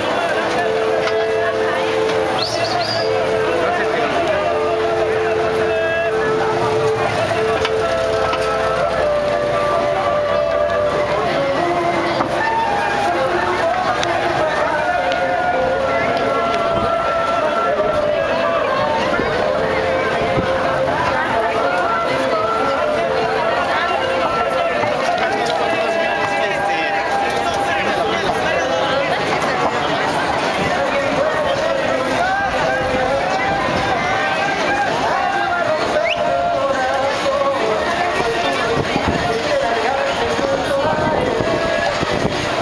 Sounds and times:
Speech: 0.0s - 42.6s.

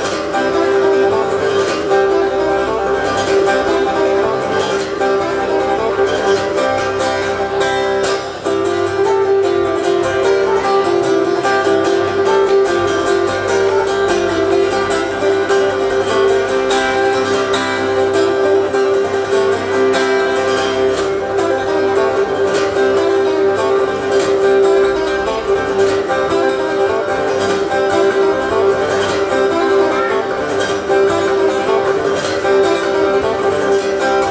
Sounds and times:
Acoustic guitar: 0.0s - 34.3s.

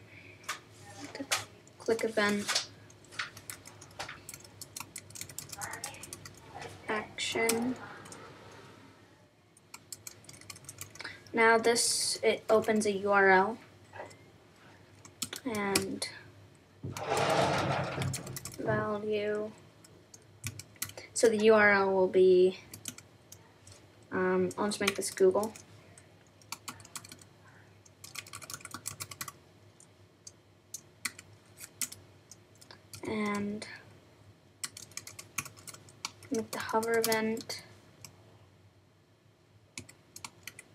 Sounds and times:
Speech: 0.8s - 2.6s, 5.6s - 8.2s, 11.3s - 13.6s, 15.4s - 16.2s, 18.6s - 19.6s, 21.1s - 22.7s, 24.1s - 25.6s, 33.0s - 33.8s, 36.3s - 37.7s
Computer keyboard: 1.8s - 6.4s, 9.6s - 11.1s, 15.0s - 15.9s, 17.9s - 18.6s, 20.1s - 21.0s, 22.7s - 23.4s, 24.8s - 25.7s, 26.3s - 33.4s, 34.6s - 38.2s, 39.8s - 40.7s.

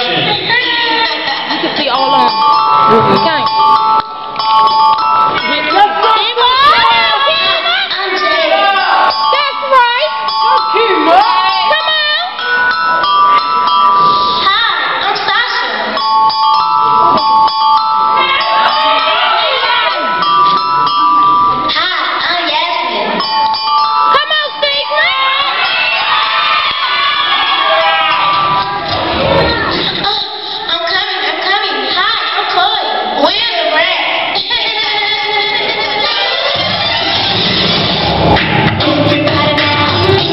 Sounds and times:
Music: 0.0s - 14.9s, 15.5s - 30.4s, 34.2s - 40.3s
Inside, large room or hall: 0.0s - 40.3s.

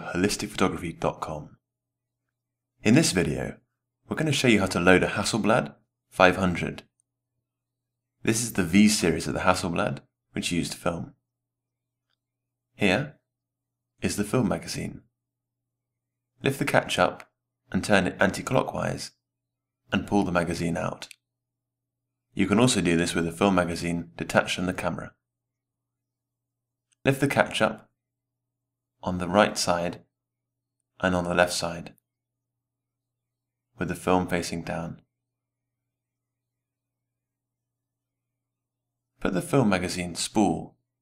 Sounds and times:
Speech: 0.0s - 1.6s, 2.8s - 7.0s, 8.2s - 11.2s, 12.8s - 13.2s, 14.0s - 15.1s, 16.4s - 19.2s, 19.9s - 21.2s, 22.4s - 25.2s, 27.0s - 27.9s, 29.0s - 30.1s, 31.0s - 32.0s, 33.8s - 35.1s, 39.2s - 40.8s.

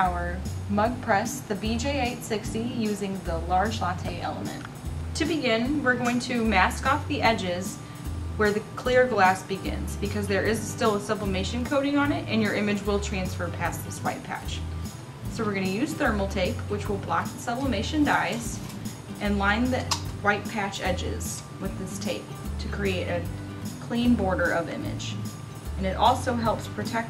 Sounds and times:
Speech: 0.0s - 7.8s, 8.4s - 14.6s, 15.3s - 18.6s, 19.2s - 25.2s, 25.8s - 27.1s
Music: 0.0s - 27.1s.

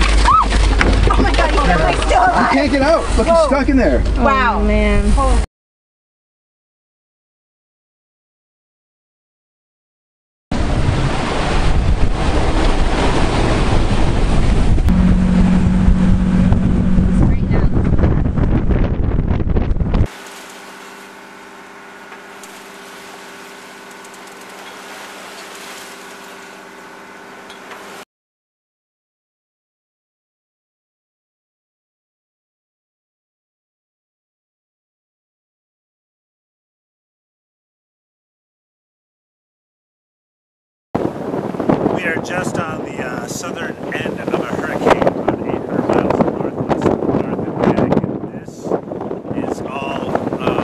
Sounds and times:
Boat, Water vehicle: 0.0s - 5.5s, 10.5s - 28.1s, 41.0s - 50.6s
Ocean: 0.0s - 5.5s, 10.5s - 28.1s, 41.0s - 50.6s
Speech: 1.1s - 5.5s, 17.2s - 17.8s, 42.0s - 50.6s.

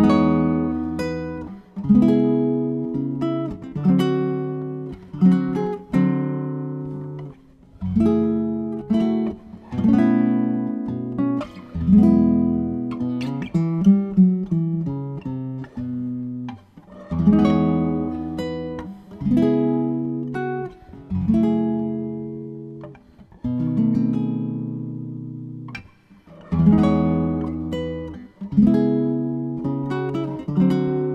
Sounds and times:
Guitar: 0.0s - 31.1s.

